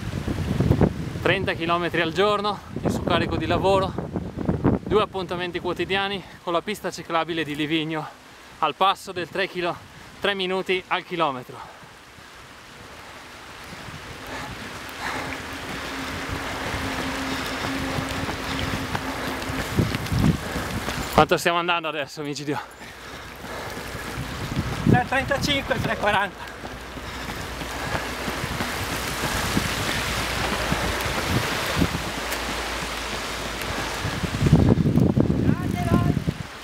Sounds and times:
Outside, rural or natural: 0:00.0 - 0:36.6
Speech: 0:04.9 - 0:11.7, 0:21.2 - 0:22.7, 0:24.9 - 0:26.4, 0:35.4 - 0:36.2.

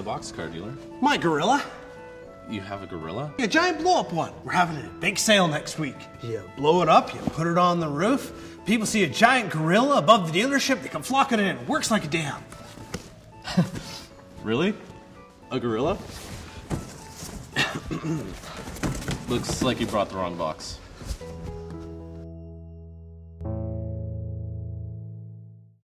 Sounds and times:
Music: 0:00.0 - 0:25.8
Speech: 0:19.3 - 0:20.8.

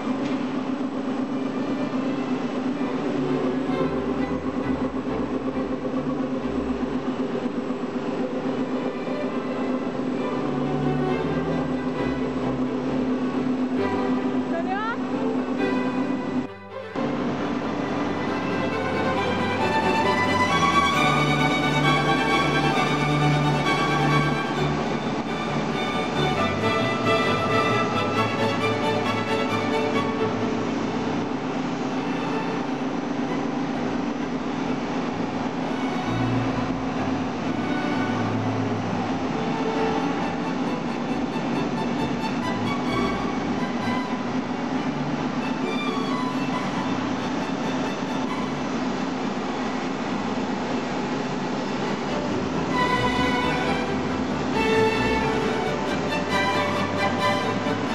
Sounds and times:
Speech: 0:14.5 - 0:15.0.

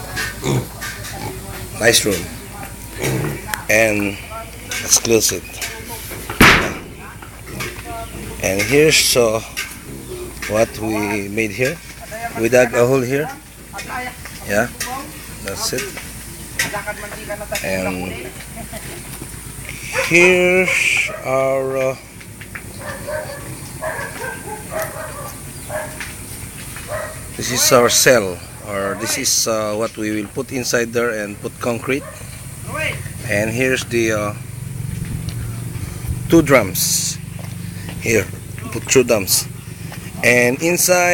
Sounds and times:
Speech: 0:00.0 - 0:16.0, 0:19.7 - 0:22.0, 0:27.4 - 0:32.0, 0:32.6 - 0:34.4, 0:36.3 - 0:37.2, 0:38.0 - 0:39.5, 0:40.2 - 0:41.1.

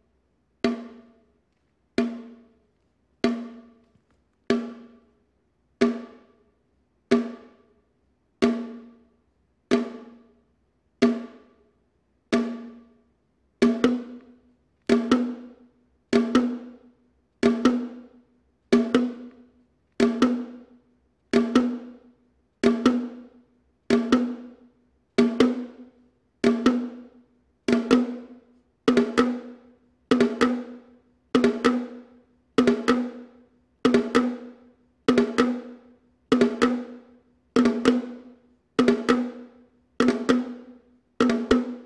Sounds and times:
Percussion: 0:00.0 - 0:41.8.

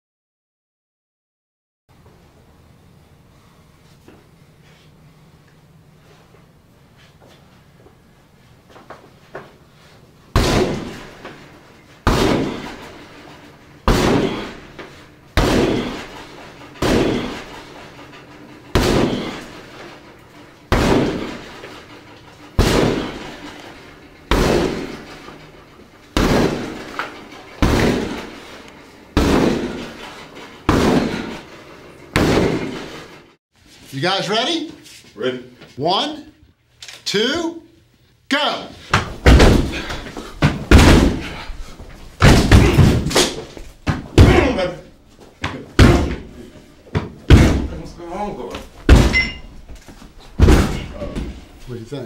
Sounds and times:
Speech: 0:33.9 - 0:36.4, 0:37.0 - 0:38.8, 0:44.2 - 0:44.9, 0:47.7 - 0:48.7, 0:50.9 - 0:52.0.

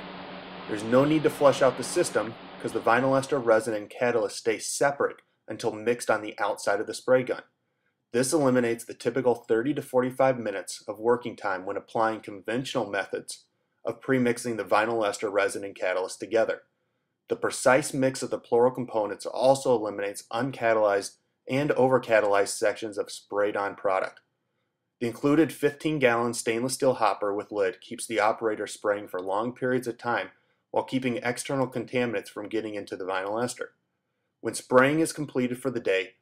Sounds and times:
Speech: 0:00.7 - 0:07.5, 0:08.2 - 0:16.6, 0:17.3 - 0:24.2, 0:25.0 - 0:33.7, 0:34.4 - 0:36.2.

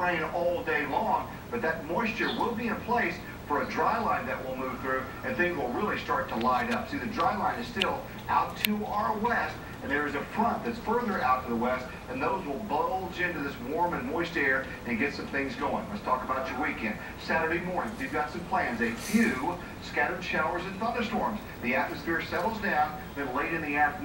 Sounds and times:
Speech: 0:00.0 - 0:24.0.

